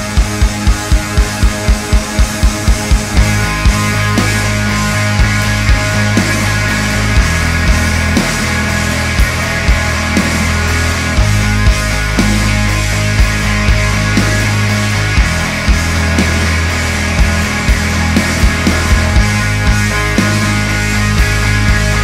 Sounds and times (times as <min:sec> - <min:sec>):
Grunge: 0:00.0 - 0:22.0.